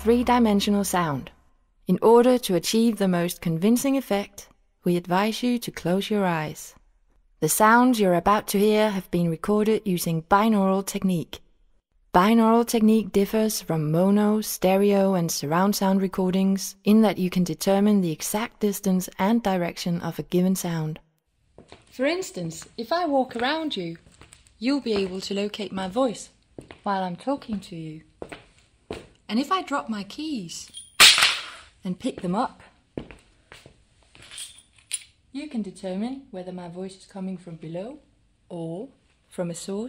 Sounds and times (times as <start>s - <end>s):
Speech: 0.0s - 1.3s, 1.9s - 6.8s, 7.4s - 11.4s, 12.2s - 21.0s, 22.0s - 24.0s, 24.6s - 28.1s, 29.3s - 30.7s, 31.8s - 32.8s, 35.4s - 39.8s.